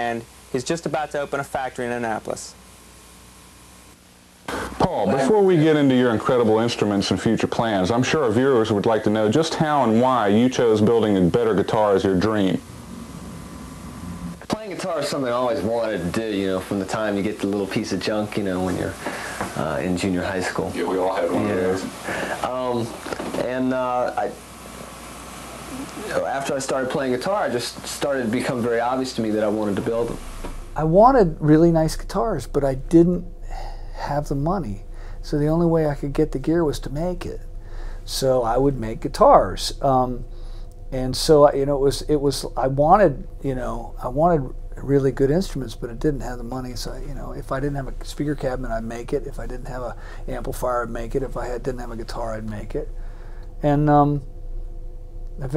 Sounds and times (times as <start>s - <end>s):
Speech: 0.0s - 2.6s, 4.7s - 12.6s, 14.5s - 19.0s, 19.6s - 24.4s, 26.0s - 30.2s, 30.8s - 37.4s, 38.1s - 40.2s, 40.9s - 52.9s, 53.6s - 54.3s.